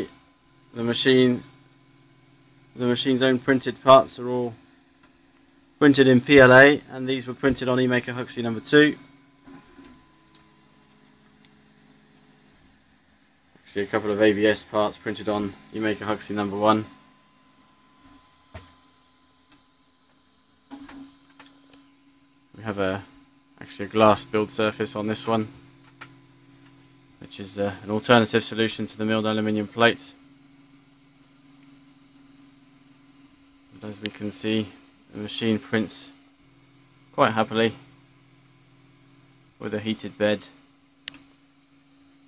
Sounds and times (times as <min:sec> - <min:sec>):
Speech: 0:00.8 - 0:01.5, 0:02.8 - 0:04.6, 0:05.8 - 0:09.0, 0:13.7 - 0:17.0, 0:22.6 - 0:25.6, 0:27.2 - 0:30.2, 0:33.8 - 0:36.2, 0:37.1 - 0:37.8, 0:39.6 - 0:40.6.